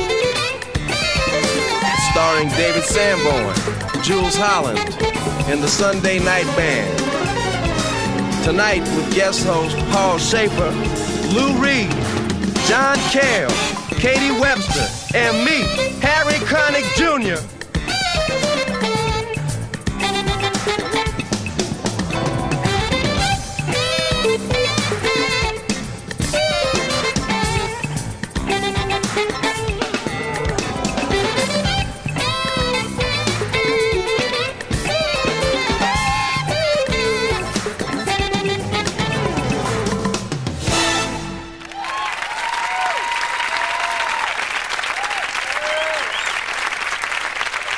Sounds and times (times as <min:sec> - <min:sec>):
Music: 0:00.0 - 0:47.7.